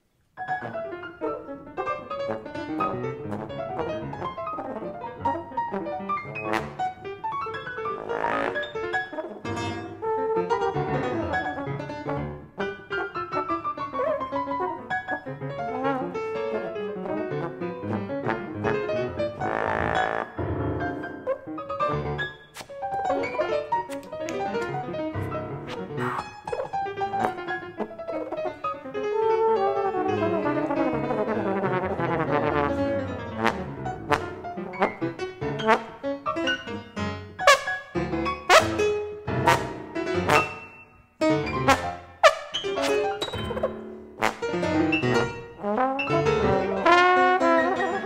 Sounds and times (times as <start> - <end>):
Brass instrument: 0.4 - 48.0.